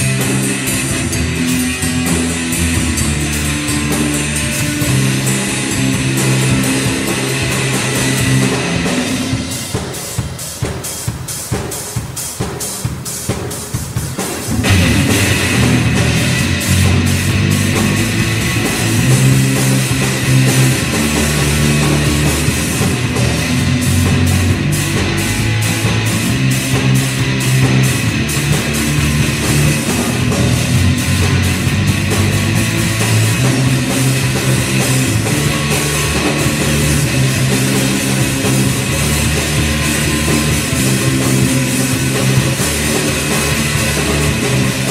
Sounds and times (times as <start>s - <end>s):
Guitar: 0.0s - 11.3s, 14.1s - 44.9s
Drum kit: 0.0s - 44.9s.